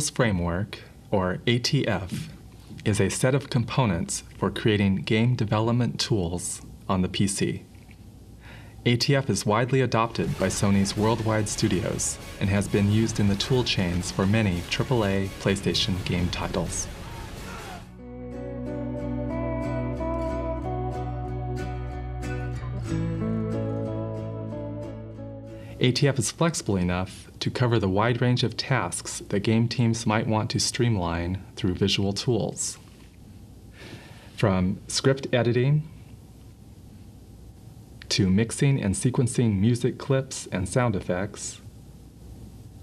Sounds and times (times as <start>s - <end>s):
Speech: 0.0s - 7.7s, 8.8s - 16.9s, 25.8s - 32.8s, 34.4s - 36.0s, 38.0s - 41.7s
Music: 10.1s - 25.9s.